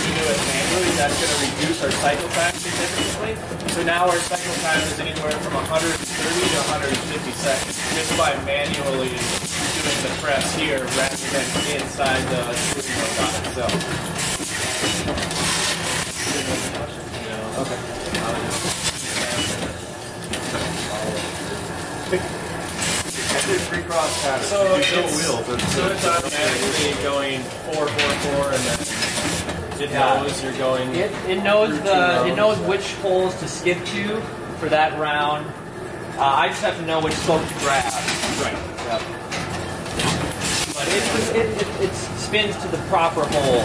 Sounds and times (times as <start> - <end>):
Speech: 0.0 - 13.8, 16.2 - 19.8, 20.8 - 21.5, 23.2 - 28.9, 29.8 - 35.6, 36.2 - 39.2, 40.7 - 43.6
Inside, large room or hall: 0.0 - 43.6.